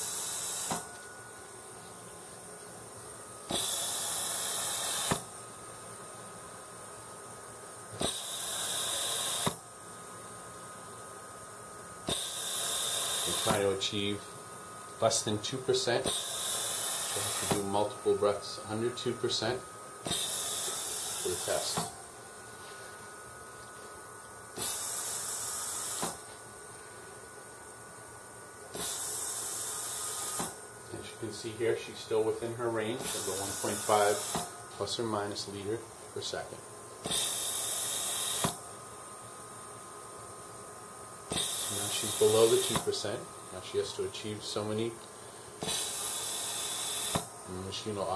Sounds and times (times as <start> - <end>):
Speech: 13.3 - 14.3, 15.0 - 16.1, 17.2 - 19.7, 21.2 - 21.9, 30.9 - 36.6, 41.7 - 45.0, 47.5 - 48.1.